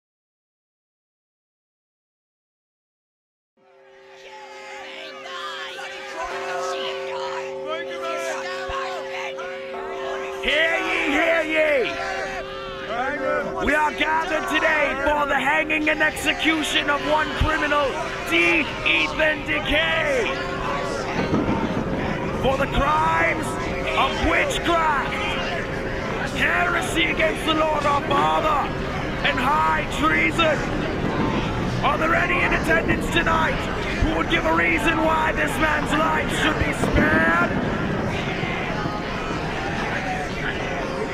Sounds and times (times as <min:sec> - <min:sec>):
Speech: 0:12.9 - 0:20.4, 0:22.4 - 0:25.2, 0:26.3 - 0:30.6, 0:31.8 - 0:37.6.